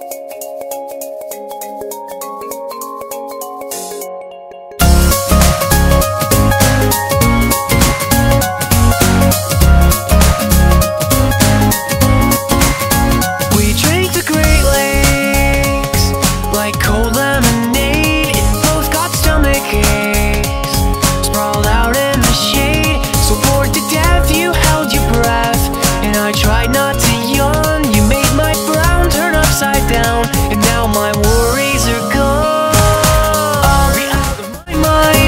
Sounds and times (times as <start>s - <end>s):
Music: 0.0s - 35.2s.